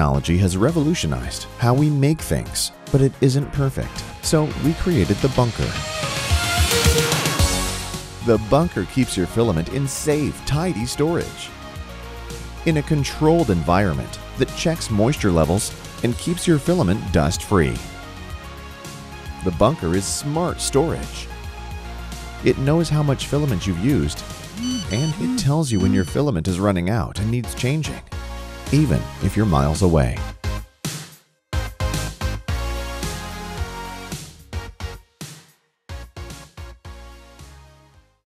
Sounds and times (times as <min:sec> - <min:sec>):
Speech: 0:00.0 - 0:05.8, 0:08.2 - 0:11.5, 0:12.6 - 0:17.9, 0:19.4 - 0:21.3, 0:22.4 - 0:28.1, 0:28.7 - 0:30.3
Music: 0:00.0 - 0:38.2.